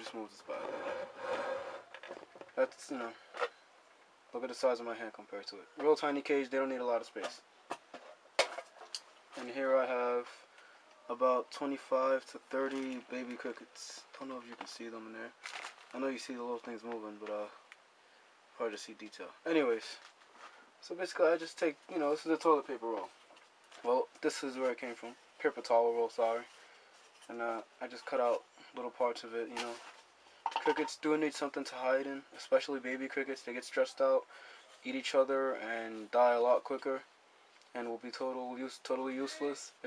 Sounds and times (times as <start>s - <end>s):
Speech: 0.0s - 0.8s, 2.6s - 3.2s, 4.3s - 7.4s, 9.4s - 10.4s, 11.0s - 17.6s, 18.6s - 20.0s, 20.8s - 23.1s, 23.8s - 26.5s, 27.3s - 29.9s, 30.6s - 37.1s, 37.7s - 39.8s.